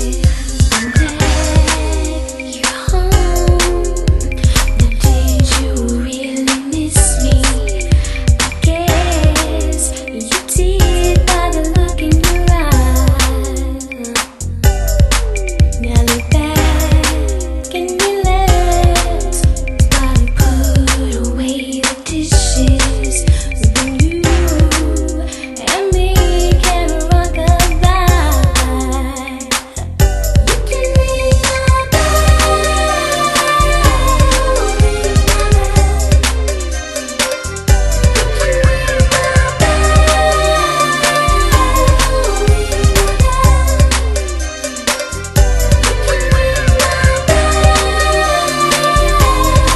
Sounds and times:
Music: 0.0s - 49.7s.

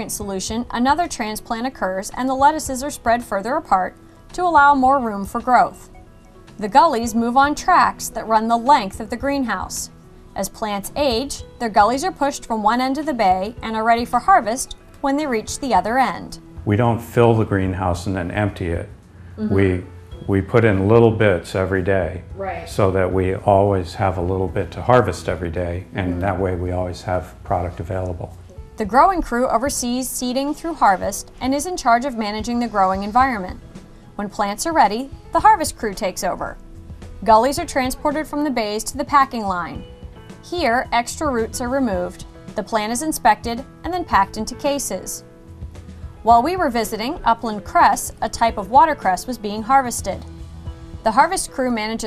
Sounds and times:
Music: 0.0s - 52.0s
Speech: 6.6s - 33.6s.

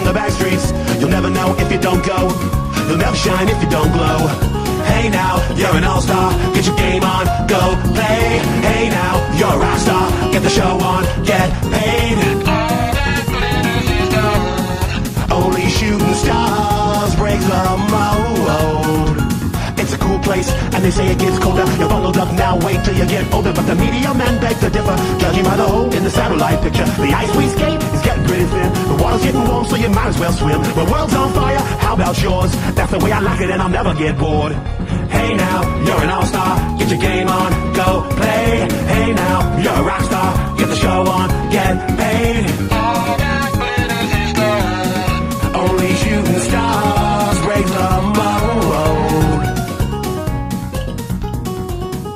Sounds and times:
Music: 0.0s - 52.1s.

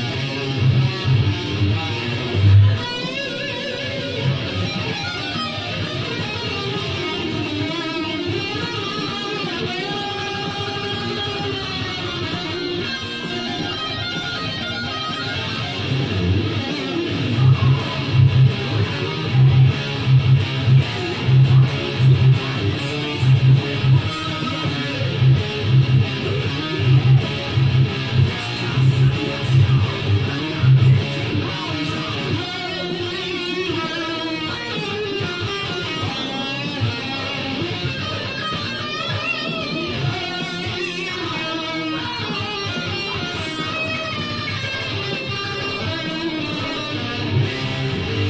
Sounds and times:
Guitar: 0.0s - 48.2s.

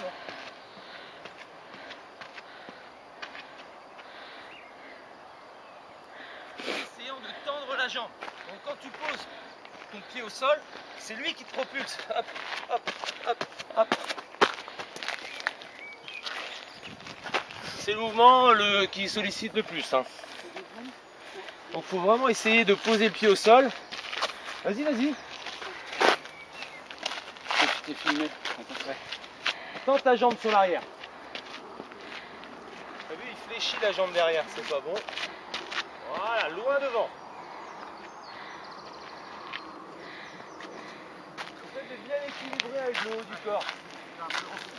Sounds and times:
Outside, rural or natural: 0.0s - 44.7s.

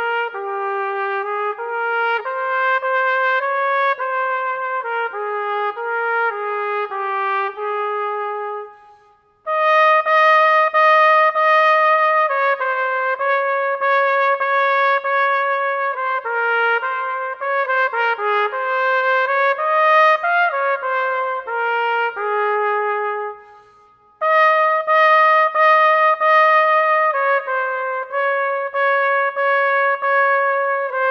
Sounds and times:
Trumpet: 0.0s - 31.1s.

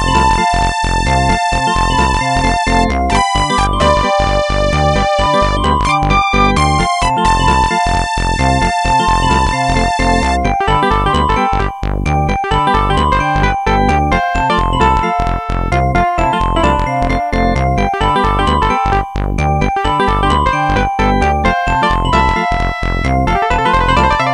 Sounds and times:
Happy music: 0.0s - 24.3s.

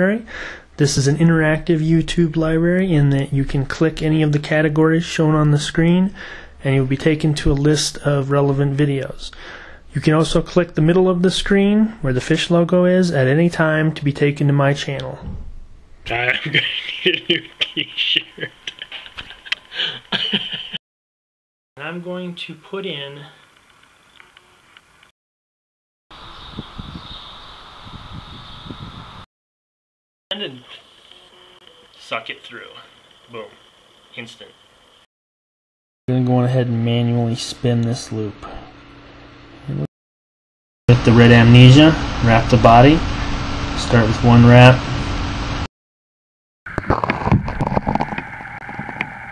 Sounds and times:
Speech: 0.0s - 9.3s, 9.9s - 15.3s, 16.1s - 18.7s, 21.8s - 23.4s, 30.3s - 30.8s, 32.0s - 33.6s, 34.2s - 34.5s, 36.1s - 38.7s, 40.9s - 43.1s, 43.8s - 44.8s.

